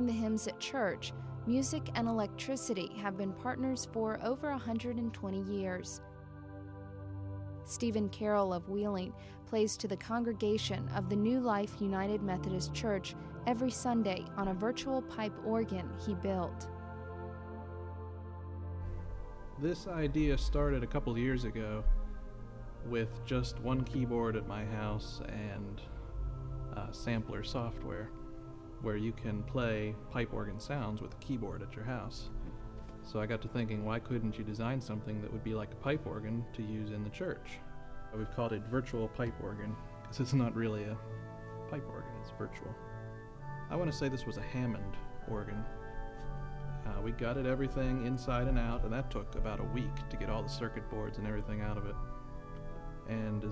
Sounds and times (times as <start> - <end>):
Speech: 0.0 - 6.0, 7.7 - 16.6, 19.6 - 21.8, 22.9 - 25.8, 26.8 - 28.1, 28.8 - 32.3, 33.1 - 37.6, 38.2 - 41.0, 43.7 - 45.6, 46.9 - 52.0, 53.1 - 53.5
Theme music: 0.0 - 53.5.